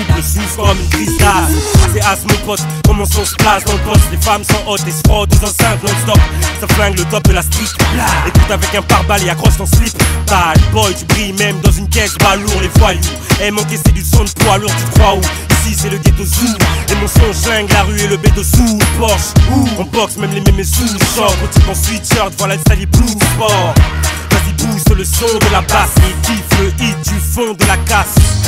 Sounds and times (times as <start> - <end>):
Music: 0.0 - 28.4.